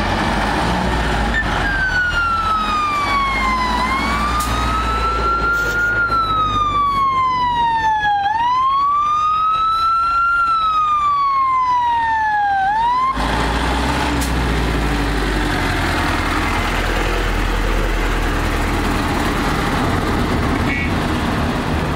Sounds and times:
Fire engine, fire truck (siren): 0.0s - 21.0s.

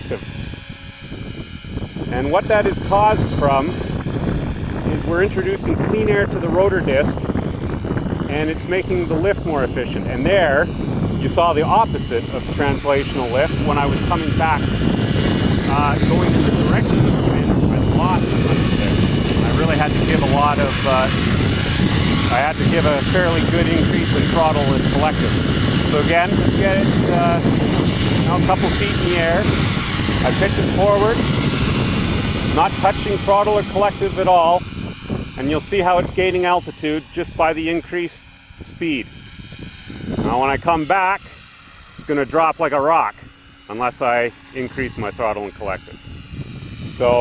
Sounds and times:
Speech: 0.0s - 0.2s, 2.1s - 3.8s, 4.9s - 7.2s, 8.3s - 14.7s, 15.7s - 21.2s, 22.3s - 25.2s, 25.9s - 27.5s, 28.3s - 29.5s, 30.2s - 31.2s, 32.6s - 34.6s, 35.4s - 39.1s, 40.2s - 41.3s, 42.1s - 46.0s, 46.9s - 47.2s
Helicopter: 0.0s - 47.2s
Propeller, airscrew: 0.0s - 47.2s.

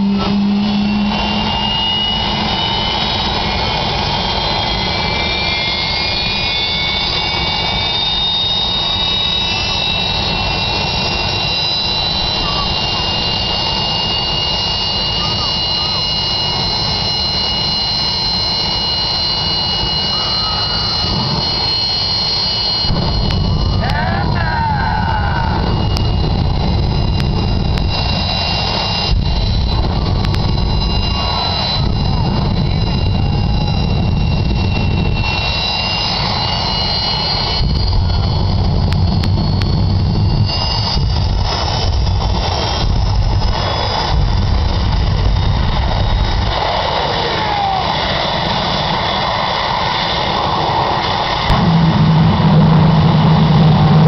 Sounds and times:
Vehicle: 0.0s - 54.0s.

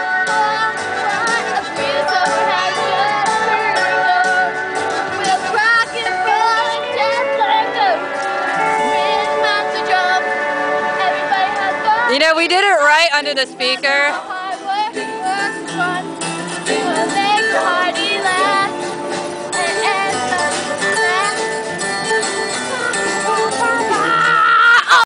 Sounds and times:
Female singing: 0.0s - 8.0s, 11.0s - 16.0s, 16.7s - 18.8s, 19.6s - 21.4s
Music: 0.0s - 25.0s.

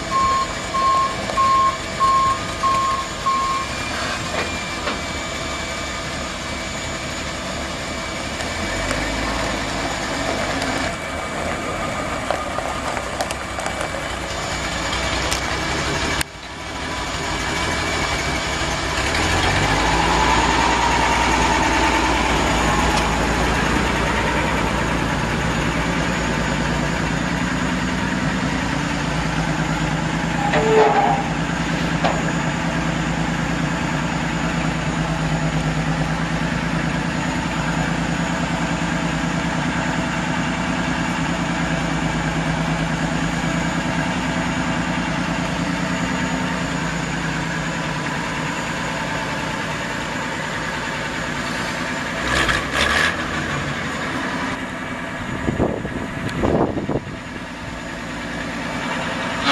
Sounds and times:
Truck: 0.0s - 59.5s.

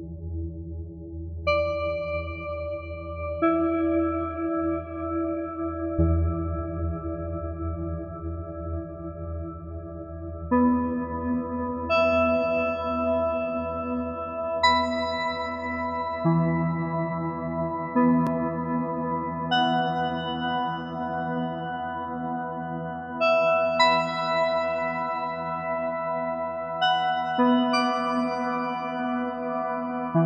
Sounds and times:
Music: 0.0s - 30.2s.

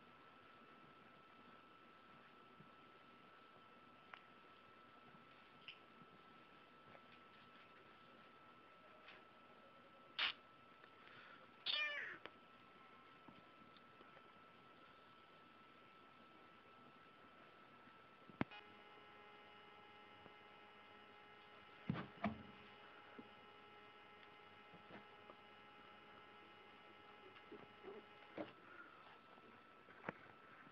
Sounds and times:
Domestic animals, pets: 11.7s - 12.2s.

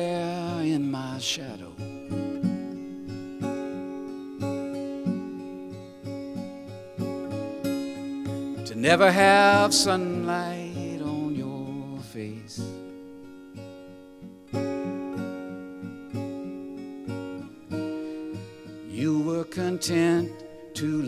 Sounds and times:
Acoustic guitar: 0.0s - 21.0s.

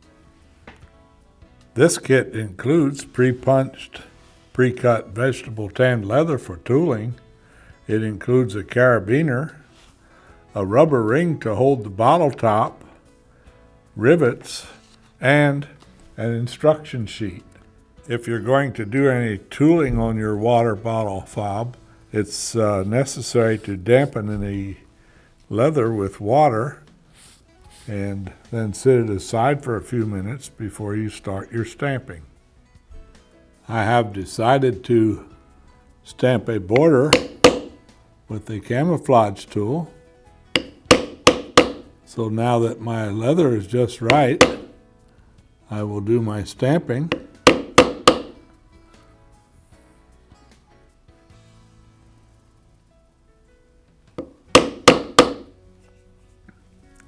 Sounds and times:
Speech: 1.8s - 7.2s, 7.9s - 9.6s, 10.6s - 12.8s, 14.0s - 17.4s, 18.1s - 24.8s, 25.5s - 26.8s, 27.9s - 32.3s, 33.7s - 35.3s, 36.1s - 37.2s, 38.3s - 39.9s, 42.1s - 44.4s, 45.7s - 47.2s.

